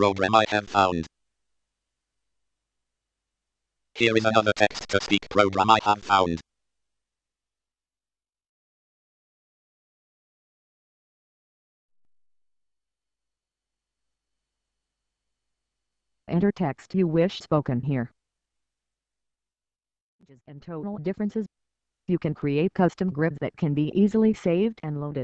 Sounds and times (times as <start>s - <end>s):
Speech synthesizer: 0.0s - 1.1s, 4.0s - 6.4s, 16.3s - 18.1s, 20.3s - 21.5s, 22.1s - 25.2s.